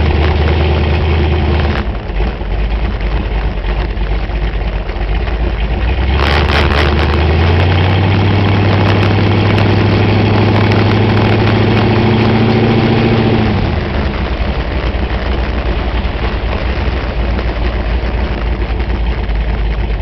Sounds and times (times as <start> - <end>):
Car: 0.0 - 20.0.